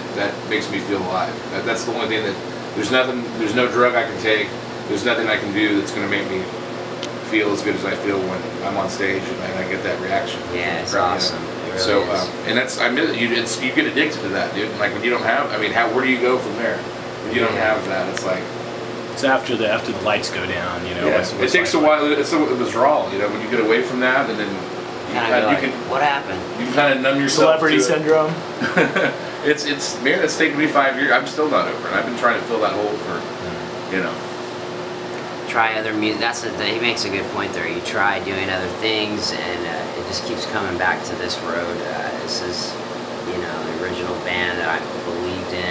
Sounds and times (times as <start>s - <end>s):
Speech: 0.0s - 6.5s, 7.3s - 18.5s, 19.2s - 28.4s, 29.4s - 34.2s, 35.5s - 45.7s.